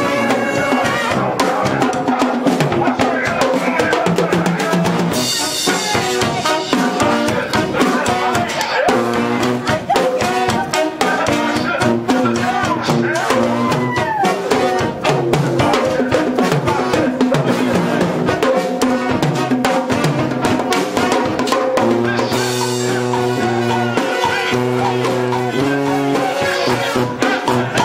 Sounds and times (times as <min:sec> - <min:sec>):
Orchestra: 0:00.0 - 0:02.7, 0:04.8 - 0:27.8
Brass instrument: 0:00.0 - 0:27.8
Inside, large room or hall: 0:00.0 - 0:27.8.